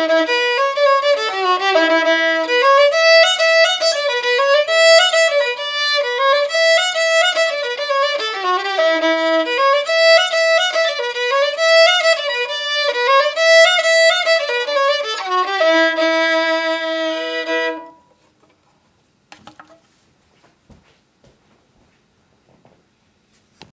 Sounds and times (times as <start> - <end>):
Violin, fiddle: 0.0 - 18.1.